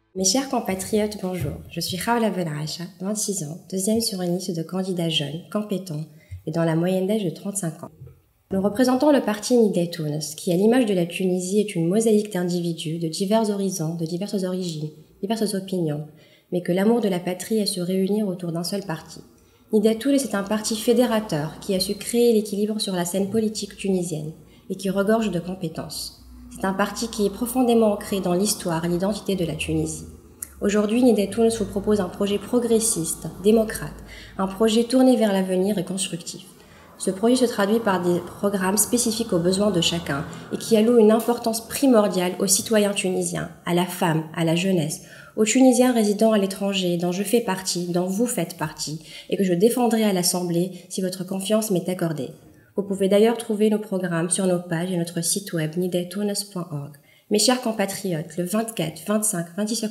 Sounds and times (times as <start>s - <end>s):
Speech: 0.2s - 59.9s.